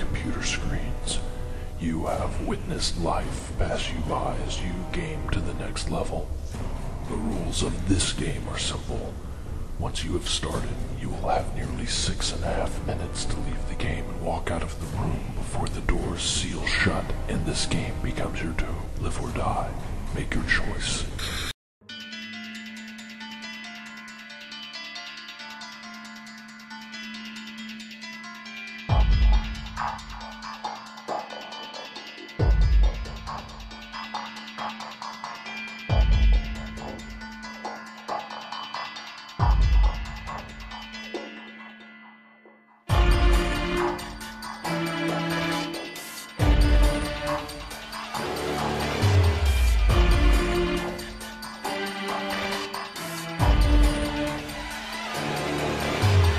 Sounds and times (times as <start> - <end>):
Music: 0.0 - 56.3.